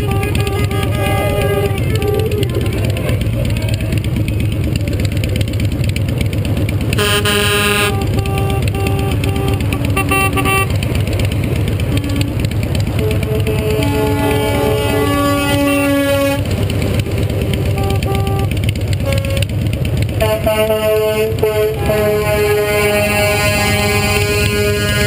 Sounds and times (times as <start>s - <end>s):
Truck: 0.0s - 25.0s.